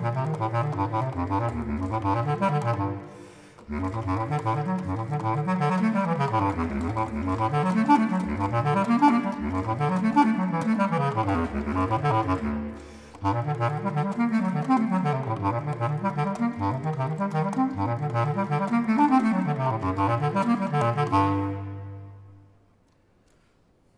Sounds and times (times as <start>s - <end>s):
Brass instrument: 0.0s - 22.5s
Saxophone: 0.0s - 22.8s.